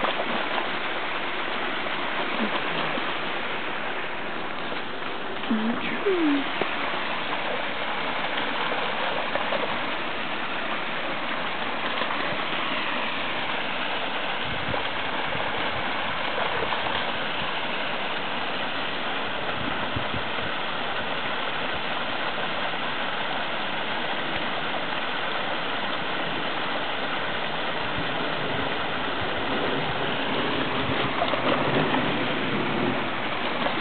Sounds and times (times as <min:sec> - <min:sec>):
Stream: 0:00.0 - 0:33.8.